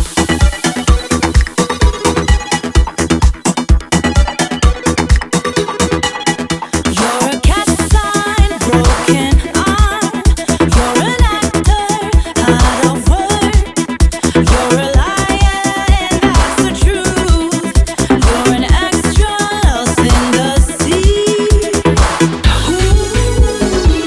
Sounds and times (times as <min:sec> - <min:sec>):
Rock music: 0:00.0 - 0:20.6, 0:21.2 - 0:24.0
Dance music: 0:00.0 - 0:24.0
Independent music: 0:00.0 - 0:24.0.